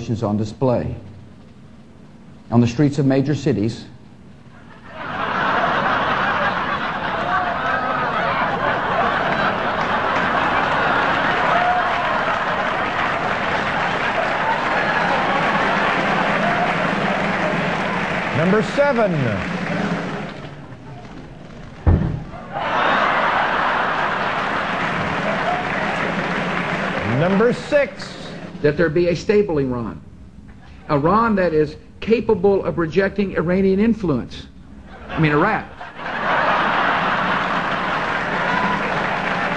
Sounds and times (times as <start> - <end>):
Speech: 0.0 - 1.1, 2.5 - 4.0, 27.1 - 30.0, 30.9 - 34.5, 35.2 - 35.7.